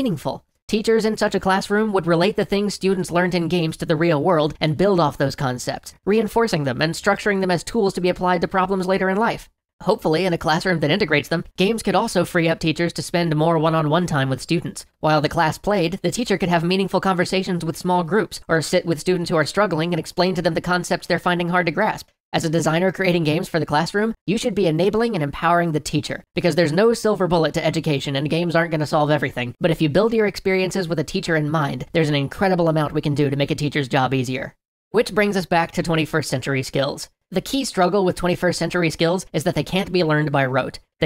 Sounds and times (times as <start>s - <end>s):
Speech synthesizer: 0.0s - 41.0s.